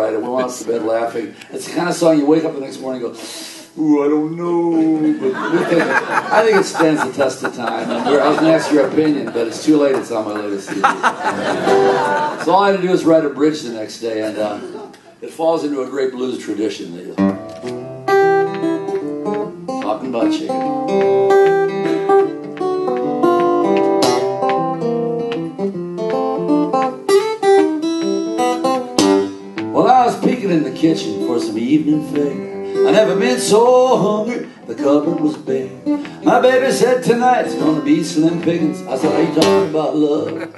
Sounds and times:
Speech: 0:00.0 - 0:03.2, 0:03.8 - 0:10.8, 0:12.4 - 0:17.2, 0:19.8 - 0:20.6, 0:29.8 - 0:33.5, 0:36.2 - 0:40.5
Guitar: 0:00.0 - 0:40.5.

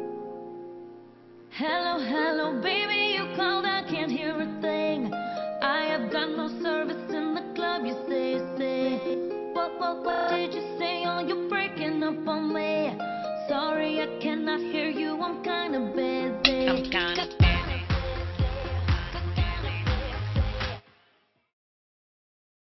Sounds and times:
Music: 0:00.0 - 0:21.5.

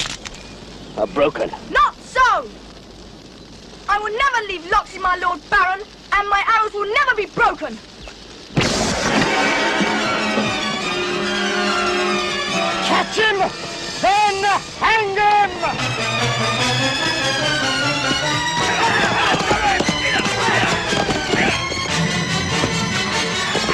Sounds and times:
Speech: 0:03.9 - 0:07.8
Music: 0:08.8 - 0:23.7.

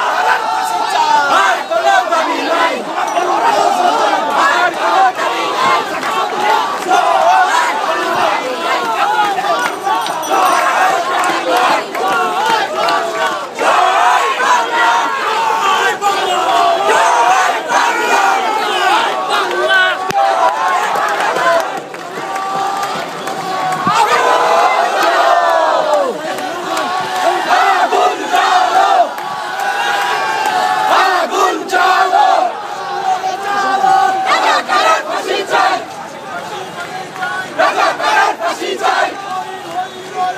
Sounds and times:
Outside, urban or manmade: 0:00.0 - 0:40.3
Speech: 0:31.3 - 0:40.3.

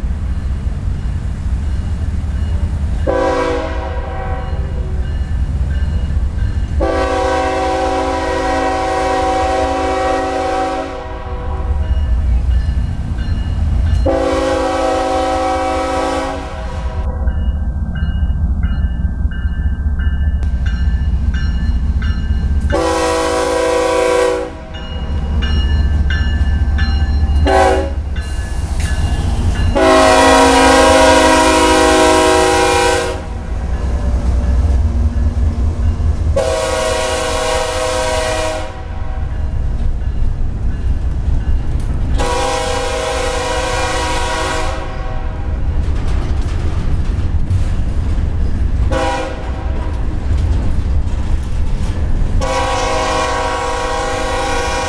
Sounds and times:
Railroad car, train wagon: 0:00.0 - 0:54.8
Train horn: 0:03.0 - 0:05.0, 0:06.8 - 0:12.0, 0:14.0 - 0:17.3, 0:22.7 - 0:24.8, 0:27.4 - 0:28.1, 0:29.7 - 0:33.5, 0:36.4 - 0:39.5, 0:42.2 - 0:45.6, 0:48.9 - 0:50.0, 0:52.4 - 0:54.8.

